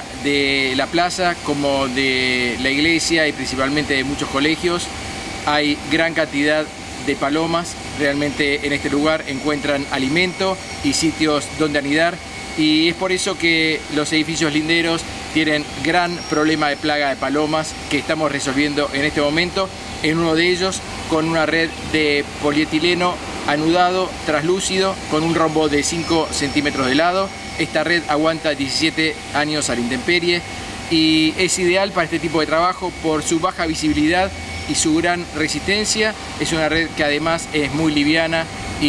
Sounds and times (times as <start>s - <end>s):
Speech: 0.0s - 4.9s, 5.5s - 38.8s
Outside, urban or manmade: 0.0s - 38.8s.